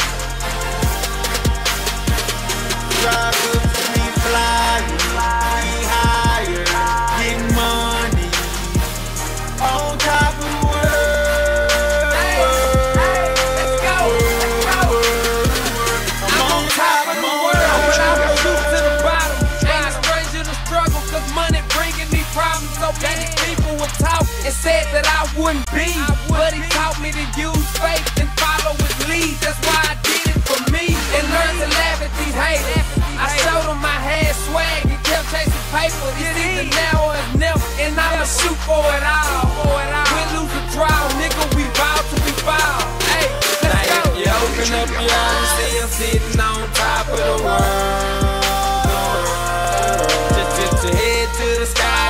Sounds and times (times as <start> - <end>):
Pop music: 0.0 - 52.1.